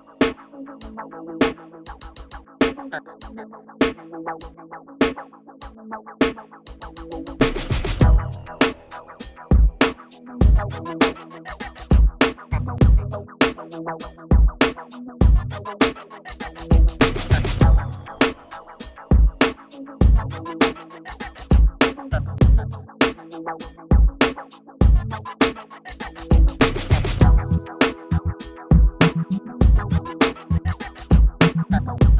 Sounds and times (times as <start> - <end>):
Music: 0.0 - 32.1.